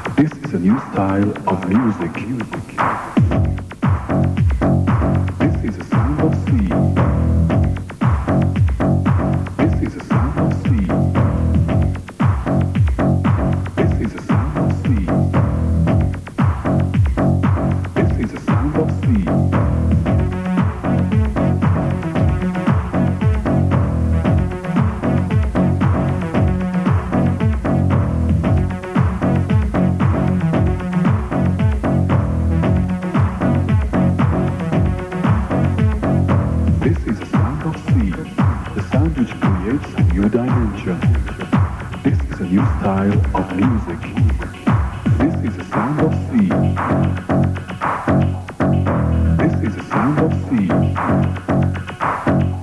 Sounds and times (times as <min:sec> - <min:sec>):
Music: 0:00.0 - 0:52.6.